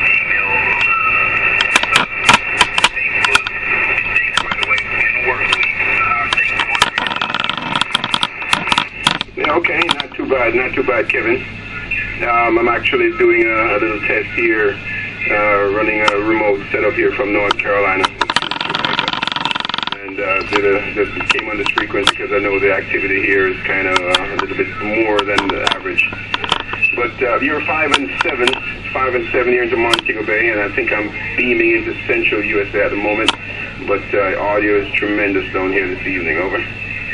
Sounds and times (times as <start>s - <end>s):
Speech: 0.0s - 7.2s, 9.2s - 19.2s, 19.9s - 36.8s.